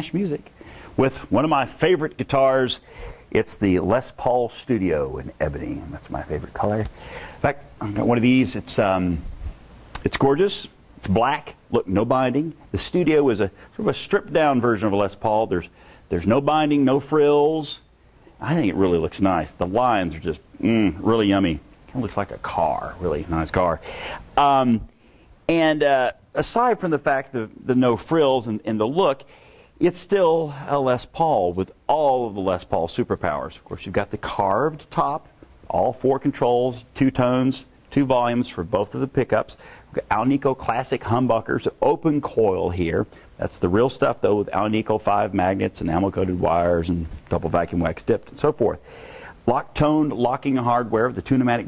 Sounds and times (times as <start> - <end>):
Speech: 0.0 - 9.3, 10.0 - 23.8, 24.4 - 24.9, 25.5 - 48.8, 49.4 - 51.6.